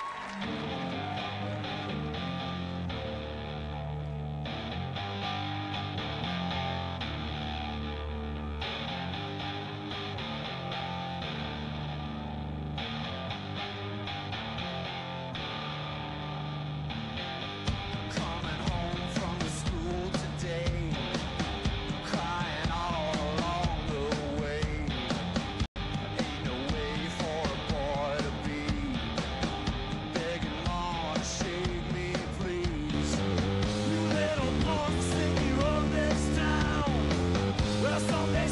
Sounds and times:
Music: 0.0s - 38.5s.

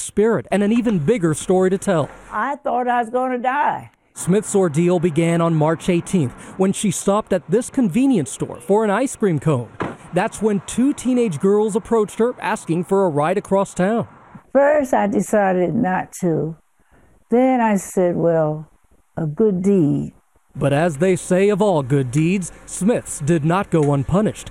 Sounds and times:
Speech: 0.0s - 16.6s, 17.4s - 24.5s.

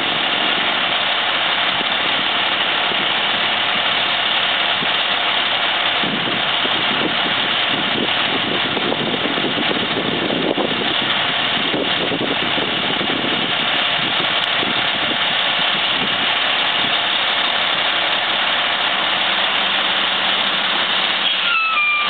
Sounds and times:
Idling: 0.0s - 22.0s
Medium engine (mid frequency): 0.0s - 22.0s
Vehicle: 0.0s - 22.0s.

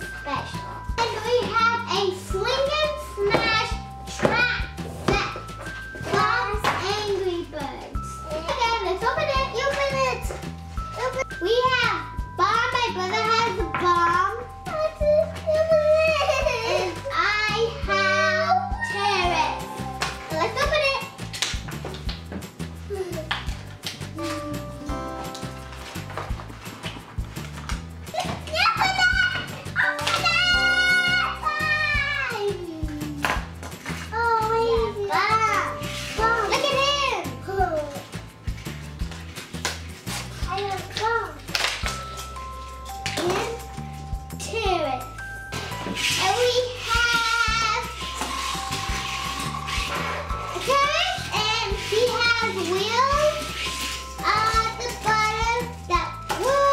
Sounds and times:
Music: 0.0s - 56.7s.

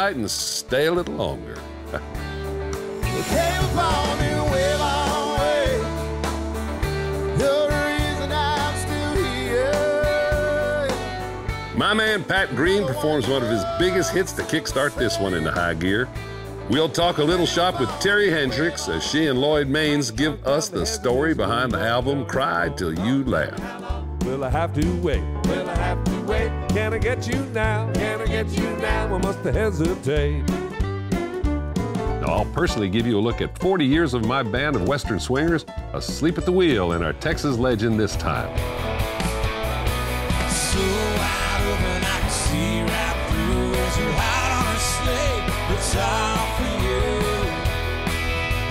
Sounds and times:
Speech: 0.0s - 1.6s, 11.8s - 16.1s, 16.7s - 23.6s, 24.3s - 25.2s, 32.2s - 38.5s
Music: 0.0s - 48.7s.

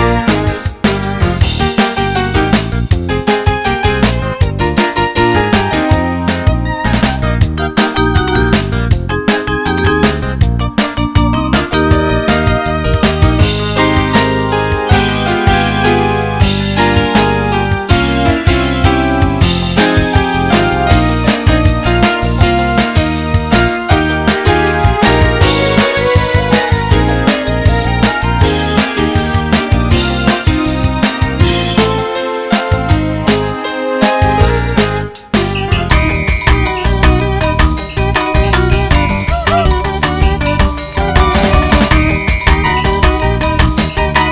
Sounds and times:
Music: 0.0s - 44.3s.

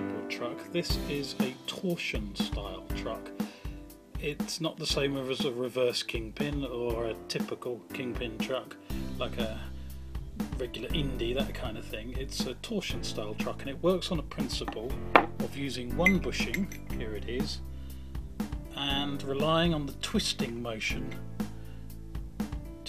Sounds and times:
Speech: 0.0s - 3.3s, 4.2s - 9.7s, 10.4s - 17.6s, 18.8s - 21.2s
Music: 0.0s - 22.8s.

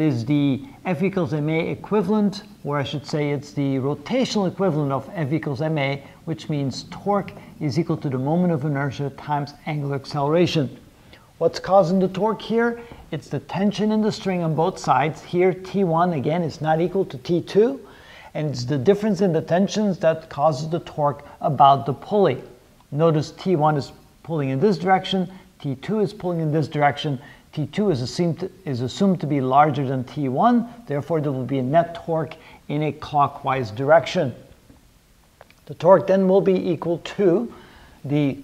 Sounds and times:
Speech: 0.0s - 10.8s, 11.4s - 34.5s, 35.6s - 38.4s.

